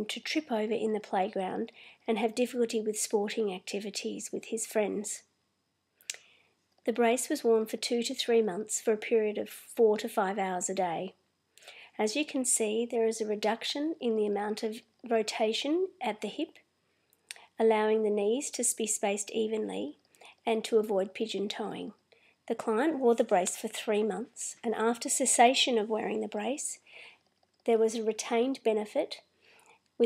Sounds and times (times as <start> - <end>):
Speech: 0.0 - 5.3, 6.9 - 11.2, 12.0 - 16.6, 17.3 - 26.8, 27.7 - 29.2.